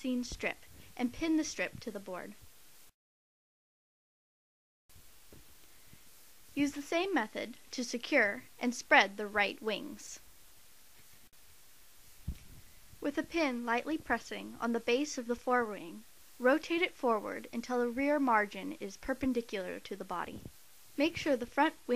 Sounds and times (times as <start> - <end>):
Speech: 0.0 - 2.4, 6.6 - 10.2, 13.0 - 21.9.